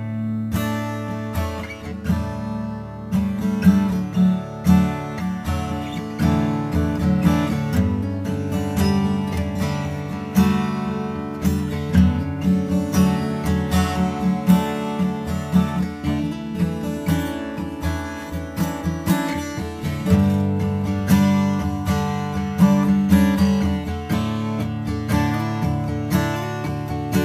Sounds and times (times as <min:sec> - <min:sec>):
Music: 0:00.0 - 0:27.2.